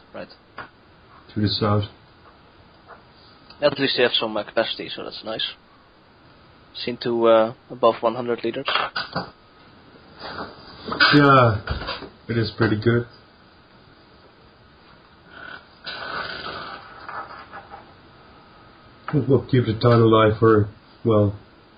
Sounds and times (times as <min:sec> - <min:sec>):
Inside, small room: 0:00.0 - 0:21.7
Speech: 0:01.3 - 0:02.0, 0:03.6 - 0:05.6, 0:06.8 - 0:08.7, 0:12.3 - 0:13.1, 0:19.1 - 0:21.4.